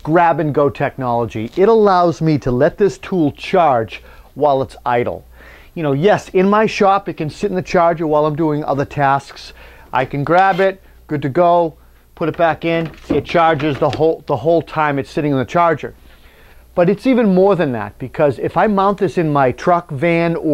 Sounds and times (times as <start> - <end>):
Speech: 0.0 - 5.2, 5.8 - 16.0, 16.8 - 20.5.